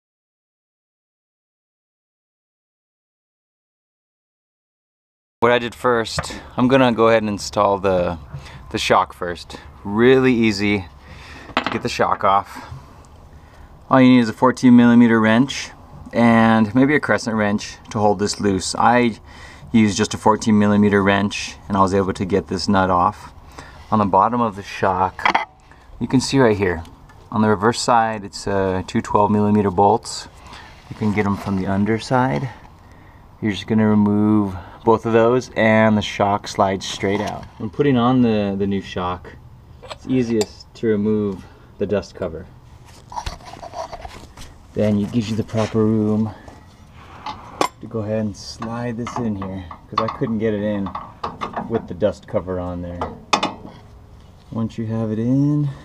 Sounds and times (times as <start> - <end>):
Speech: 5.4 - 10.9, 11.7 - 12.7, 13.9 - 25.4, 26.0 - 32.6, 33.4 - 42.5, 44.7 - 46.5, 47.8 - 51.0, 51.6 - 53.2, 54.5 - 55.8.